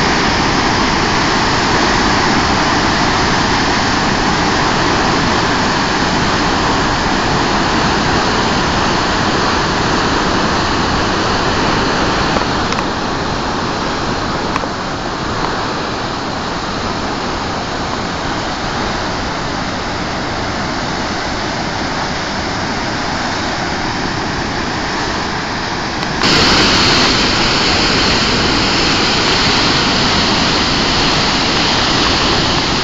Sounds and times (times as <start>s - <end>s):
Waterfall: 0.0s - 32.8s.